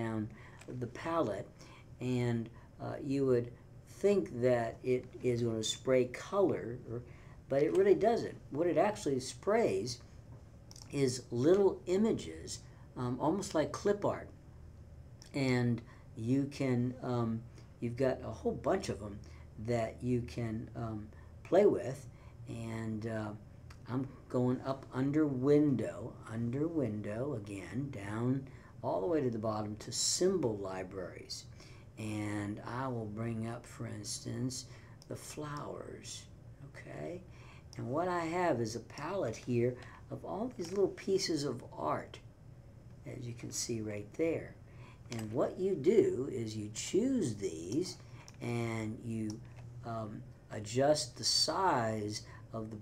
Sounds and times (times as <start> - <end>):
Speech: 0.0 - 10.1, 10.7 - 14.4, 15.2 - 42.3, 43.0 - 52.8.